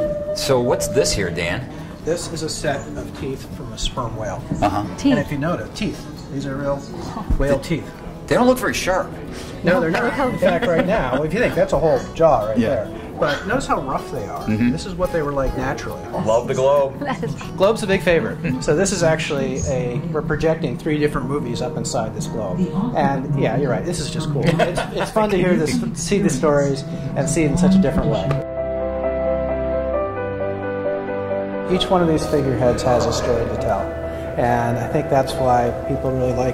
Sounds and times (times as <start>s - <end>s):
Music: 0.0s - 36.5s.